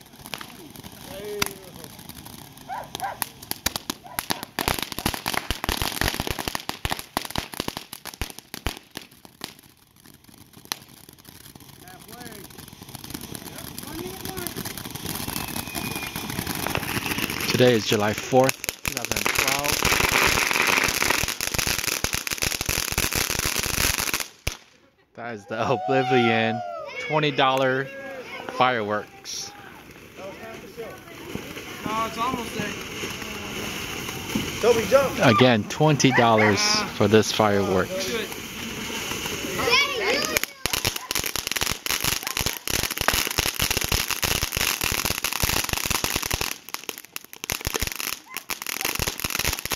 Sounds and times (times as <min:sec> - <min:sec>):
Fireworks: 0:00.0 - 0:24.8, 0:26.7 - 0:49.7
Crackle: 0:00.0 - 0:25.0, 0:27.5 - 0:49.7.